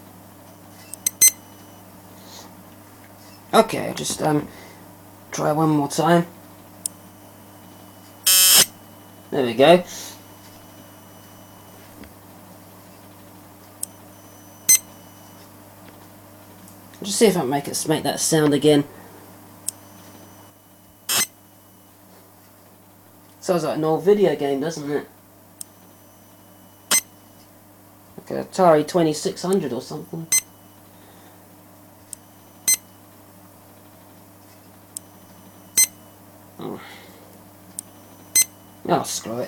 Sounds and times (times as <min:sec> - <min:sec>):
Speech: 0:03.5 - 0:04.5, 0:05.3 - 0:06.4, 0:09.3 - 0:09.9, 0:17.0 - 0:18.9, 0:23.4 - 0:25.1, 0:28.2 - 0:30.3, 0:36.6 - 0:36.9, 0:38.8 - 0:39.4.